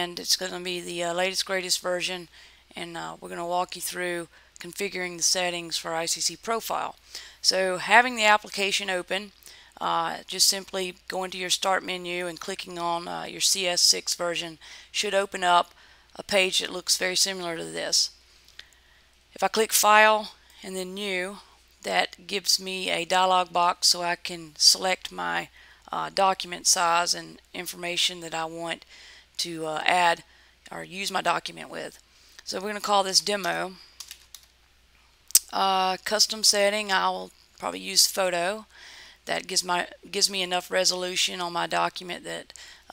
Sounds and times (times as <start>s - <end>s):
Speech: 0.0s - 18.1s, 19.4s - 28.8s, 29.4s - 33.8s, 35.4s - 38.7s, 39.3s - 42.9s.